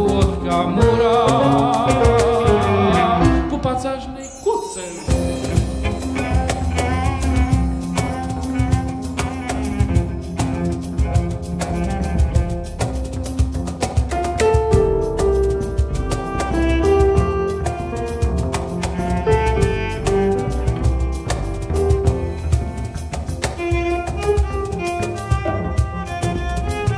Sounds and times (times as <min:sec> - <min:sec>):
Cello: 0:00.0 - 0:03.6, 0:05.0 - 0:26.9.